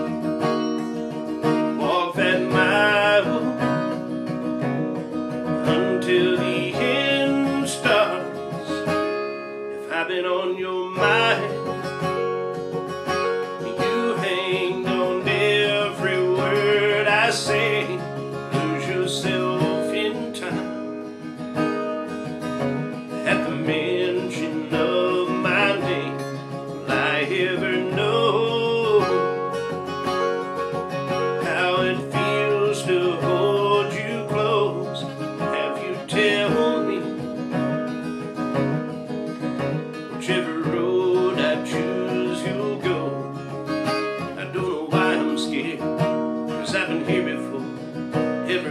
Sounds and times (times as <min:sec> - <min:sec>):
Strum: 0:00.0 - 0:48.7
Singing: 0:05.7 - 0:08.9.